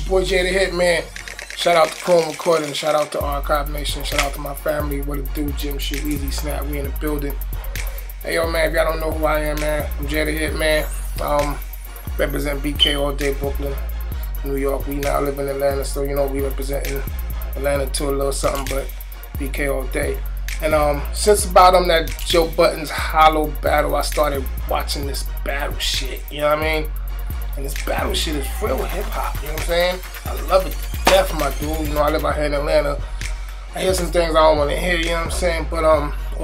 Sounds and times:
Speech: 0.0 - 7.4, 8.2 - 11.6, 12.2 - 13.8, 14.4 - 26.9, 27.5 - 33.0, 33.8 - 36.4
Music: 0.0 - 36.4.

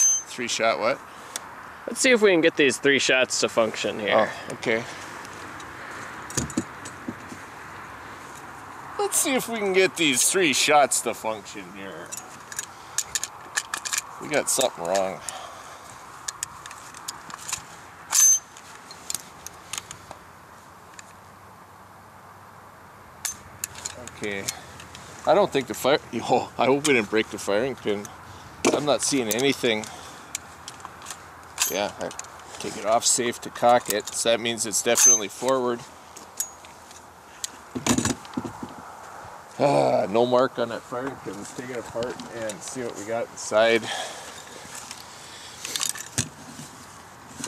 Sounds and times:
Speech: 0.3 - 1.0, 1.9 - 5.0, 9.0 - 12.1, 14.2 - 15.3, 24.0 - 24.6, 25.2 - 28.1, 28.7 - 29.9, 31.7 - 35.9, 39.6 - 44.0.

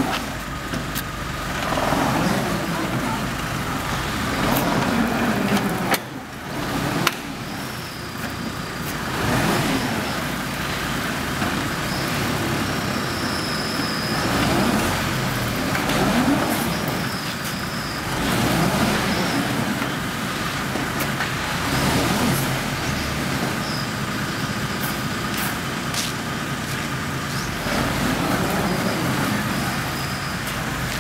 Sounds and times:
Truck: 0.0 - 31.0.

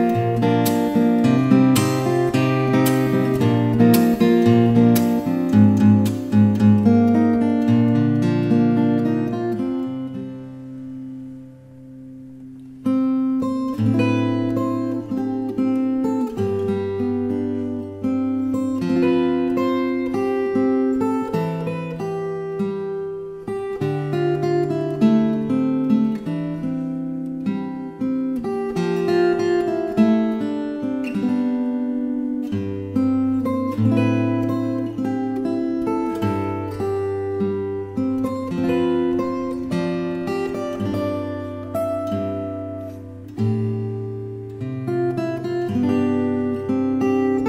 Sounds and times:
Acoustic guitar: 0.0 - 47.4.

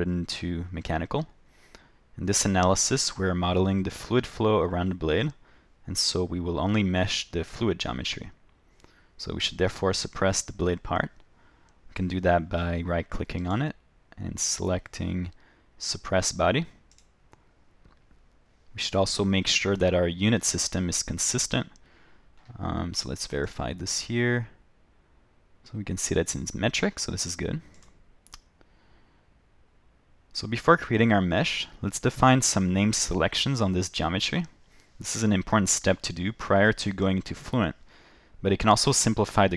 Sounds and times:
Speech: 0.0 - 1.4, 2.2 - 8.4, 9.2 - 11.2, 11.9 - 16.8, 18.7 - 21.8, 22.5 - 24.6, 25.6 - 27.8, 30.3 - 37.8, 38.4 - 39.5.

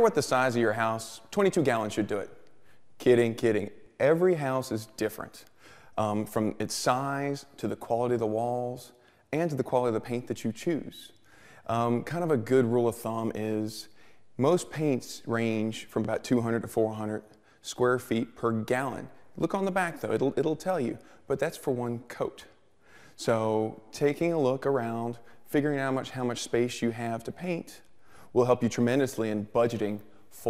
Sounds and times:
Speech: 0.0 - 2.4, 3.0 - 22.6, 23.2 - 30.5.

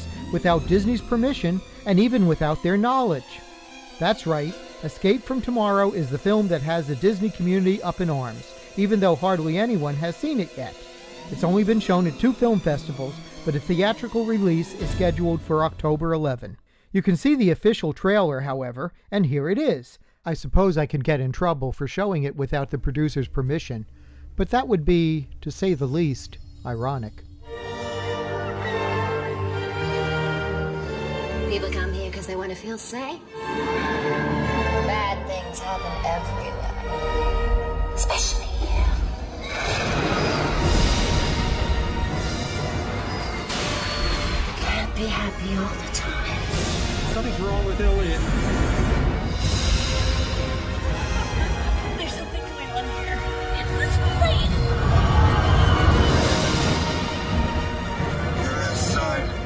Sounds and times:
Music: 0.0 - 16.4, 23.9 - 59.4
Speech: 0.4 - 3.4, 4.0 - 27.2.

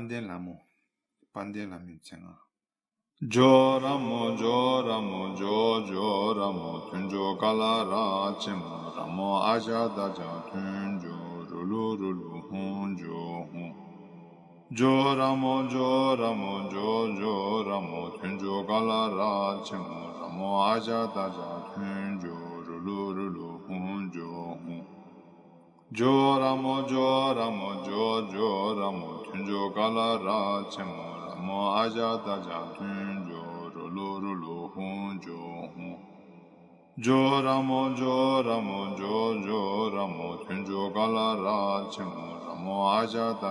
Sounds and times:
Speech: 0.0 - 0.6, 1.4 - 2.4, 3.2 - 13.7, 14.8 - 24.8, 26.0 - 36.0
Mantra: 3.2 - 13.8, 14.7 - 24.9, 25.9 - 36.0, 37.0 - 43.5.

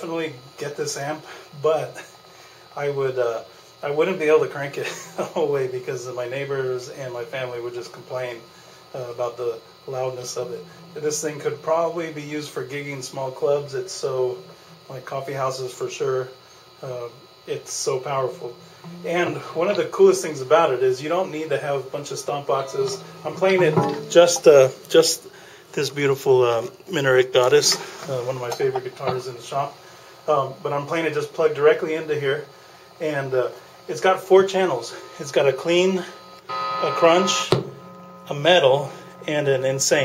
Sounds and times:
Speech: 0.0 - 2.1, 2.7 - 36.2, 36.8 - 37.6, 38.3 - 40.0.

